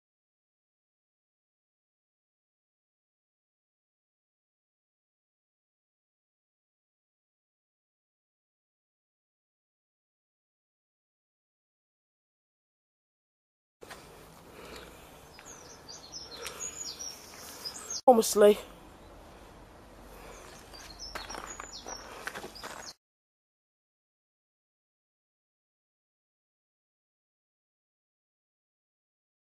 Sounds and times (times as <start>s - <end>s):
Outside, rural or natural: 13.8s - 23.0s
Chirp, tweet: 15.3s - 18.2s, 20.2s - 23.0s
Speech: 18.1s - 18.7s.